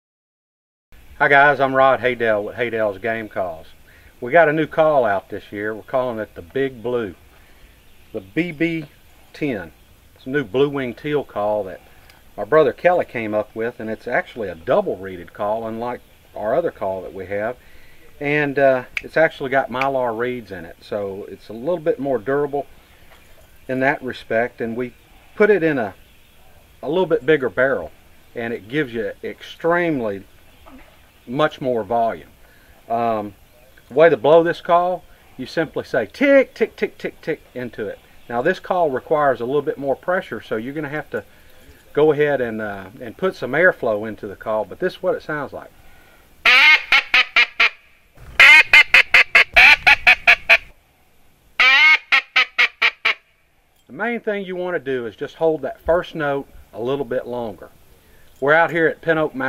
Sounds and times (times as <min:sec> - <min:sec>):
Speech: 0:01.2 - 0:07.2, 0:08.2 - 0:11.8, 0:12.4 - 0:22.7, 0:23.7 - 0:26.0, 0:26.8 - 0:32.3, 0:32.9 - 0:45.8, 0:53.9 - 0:57.8, 0:58.4 - 0:59.4.